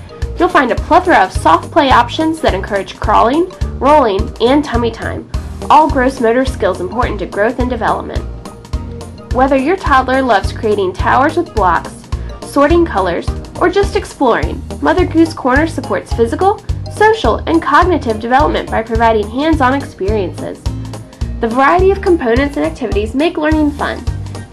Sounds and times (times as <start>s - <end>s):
Music: 0.0s - 24.5s
Speech: 0.4s - 8.2s, 9.4s - 20.6s, 21.4s - 24.1s.